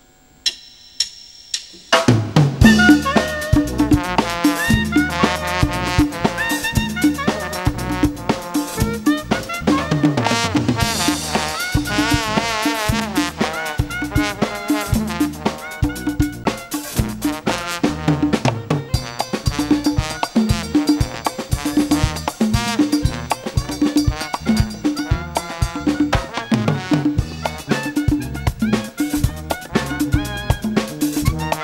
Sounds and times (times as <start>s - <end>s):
Independent music: 0.4s - 31.6s.